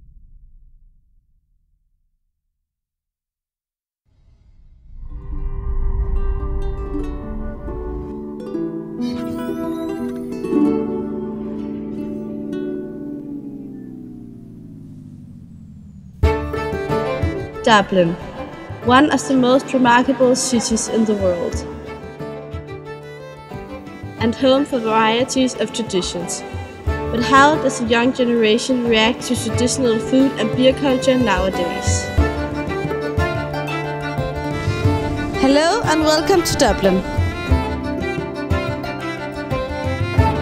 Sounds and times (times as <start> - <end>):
Music: 5.0 - 14.9, 16.2 - 40.4
Speech: 17.6 - 21.6, 24.2 - 26.4, 27.1 - 32.1, 35.4 - 37.1.